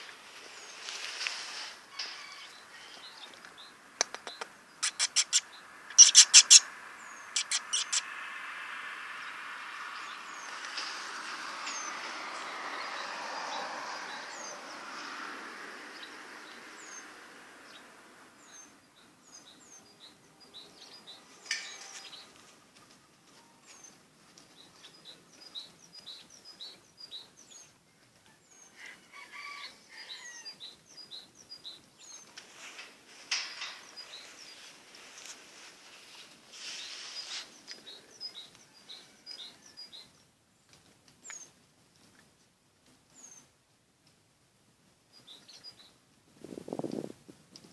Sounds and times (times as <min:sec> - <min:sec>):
Chirp, tweet: 0:02.2 - 0:08.0, 0:17.7 - 0:22.4, 0:23.3 - 0:29.0, 0:29.6 - 0:32.3, 0:36.8 - 0:41.6, 0:43.1 - 0:43.5, 0:45.1 - 0:46.0.